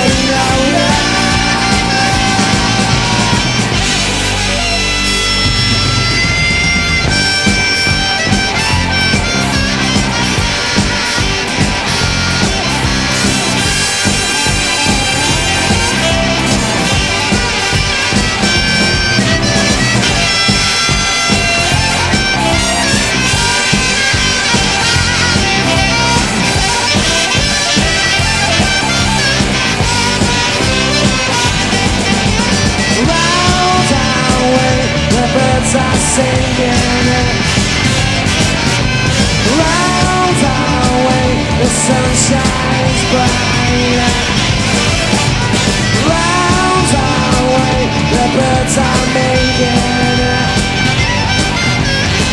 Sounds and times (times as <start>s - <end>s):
Punk rock: 0.0s - 52.3s.